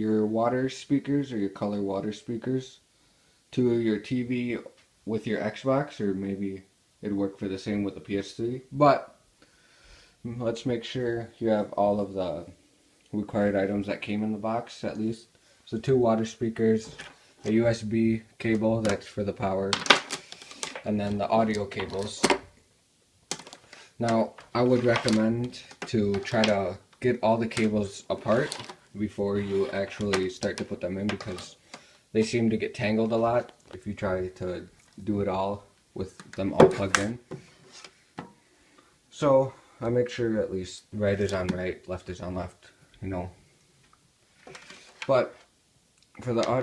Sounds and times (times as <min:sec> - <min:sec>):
Speech: 0:00.0 - 0:02.8, 0:03.5 - 0:09.2, 0:10.2 - 0:19.9, 0:20.8 - 0:22.4, 0:24.0 - 0:37.3, 0:39.1 - 0:43.4, 0:45.0 - 0:45.5, 0:46.1 - 0:46.6.